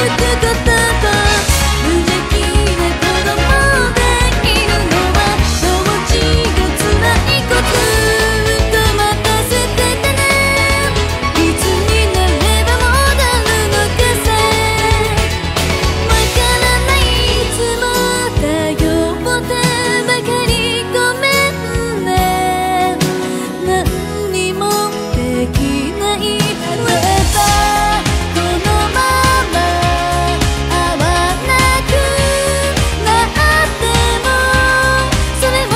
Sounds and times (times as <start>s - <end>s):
Music: 0.0s - 35.7s.